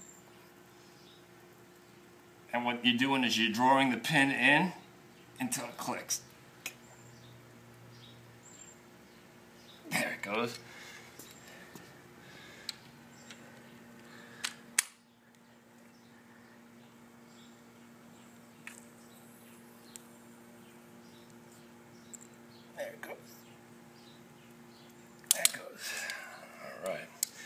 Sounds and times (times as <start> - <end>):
Speech: 2.5 - 4.8, 5.4 - 6.3, 9.9 - 10.6, 22.8 - 23.4.